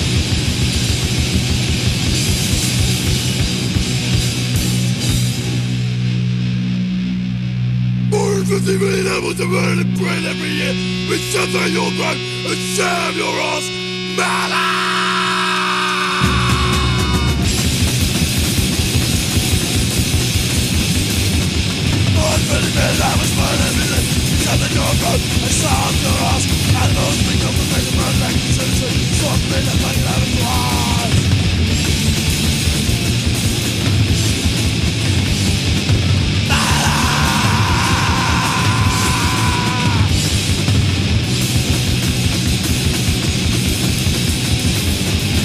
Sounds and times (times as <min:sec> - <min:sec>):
Music: 0:00.0 - 0:45.4.